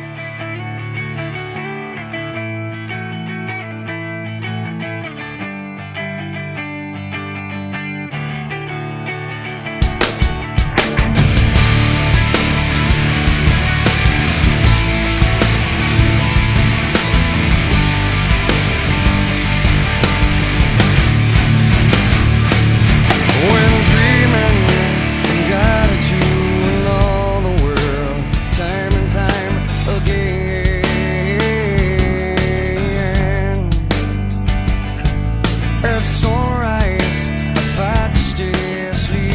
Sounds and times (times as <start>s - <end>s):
Progressive rock: 0.0s - 39.3s.